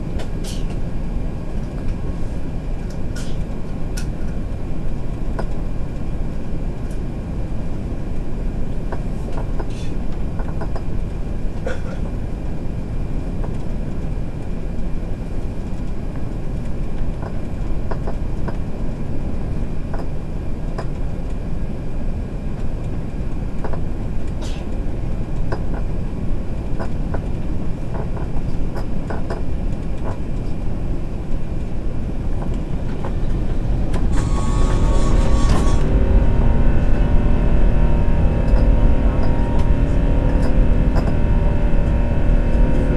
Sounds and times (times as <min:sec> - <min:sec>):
Vehicle: 0:00.0 - 0:42.9.